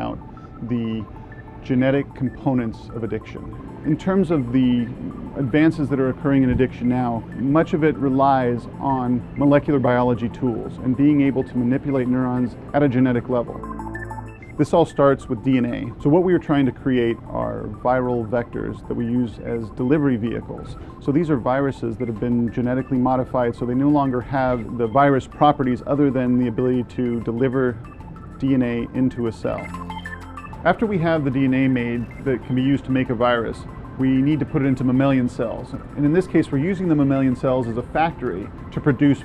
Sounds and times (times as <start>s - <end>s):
Speech: 0.0s - 1.1s, 1.7s - 13.6s, 14.6s - 27.8s, 28.4s - 29.7s, 30.6s - 39.2s.